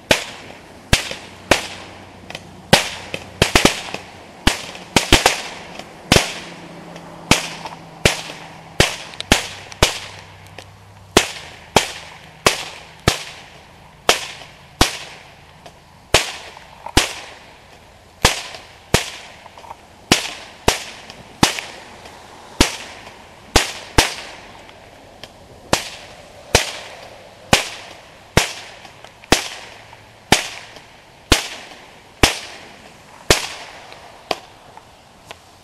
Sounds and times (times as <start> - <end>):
Firecracker: 0.0 - 35.6.